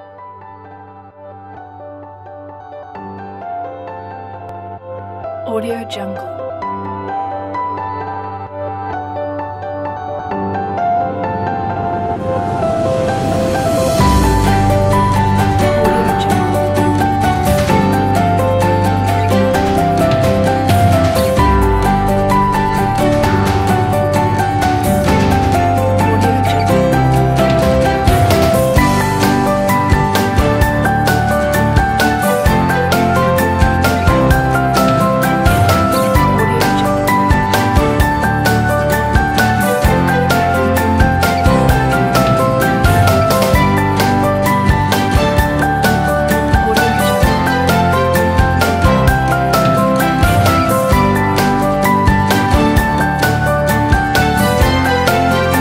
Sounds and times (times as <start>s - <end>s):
Music: 0.0s - 55.6s.